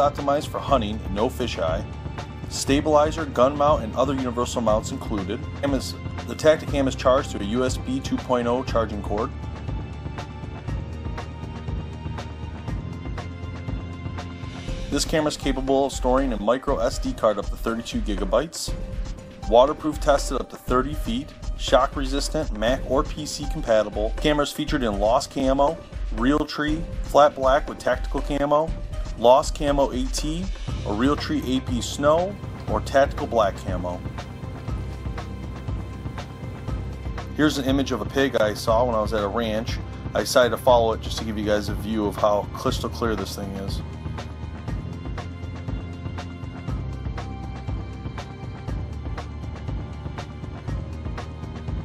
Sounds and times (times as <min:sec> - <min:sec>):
Speech: 0:00.0 - 0:01.8, 0:02.5 - 0:09.3, 0:14.9 - 0:18.8, 0:19.4 - 0:34.1, 0:37.4 - 0:43.8
Music: 0:00.0 - 0:51.8.